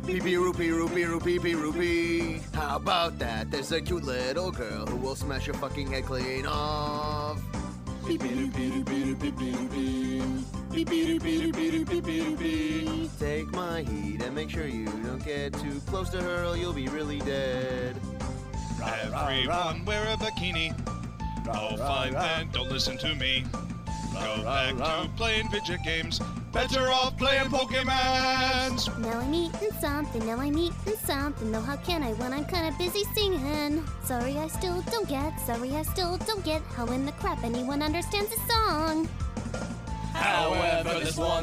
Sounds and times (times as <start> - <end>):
Music for children: 0.0 - 41.4.